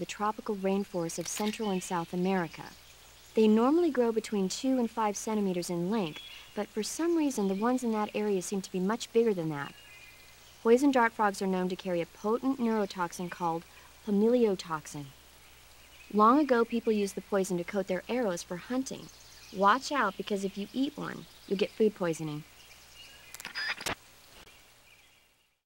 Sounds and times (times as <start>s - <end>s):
Speech: 0.0s - 2.8s, 3.4s - 9.8s, 10.6s - 15.1s, 16.1s - 22.4s.